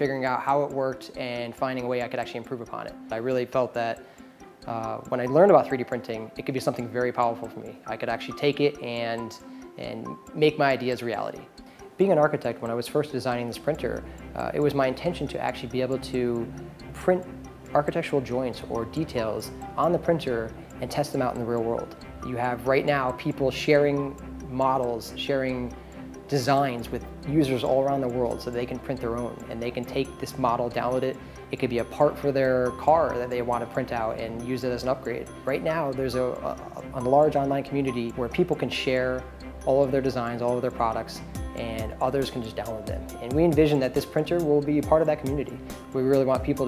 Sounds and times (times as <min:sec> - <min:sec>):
Speech: 0:00.0 - 0:04.0, 0:04.7 - 0:25.7, 0:26.3 - 0:46.6
Music: 0:00.0 - 0:46.6.